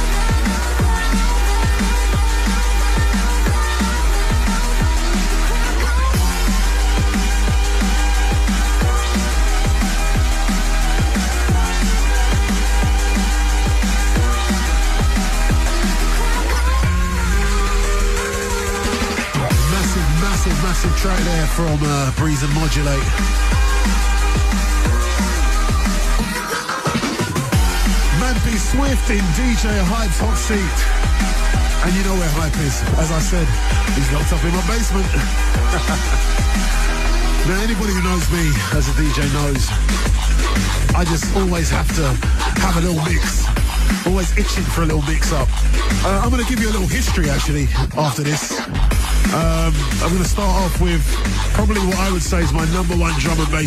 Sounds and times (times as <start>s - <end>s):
Drum and bass: 0.0s - 53.6s.